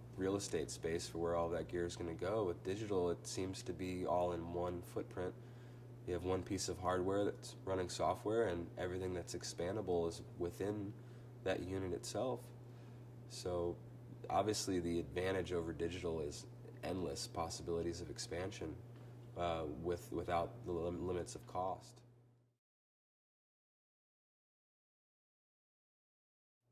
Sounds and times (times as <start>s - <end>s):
Speech: 0.2s - 5.4s, 6.1s - 12.6s, 13.3s - 18.8s, 19.4s - 22.0s.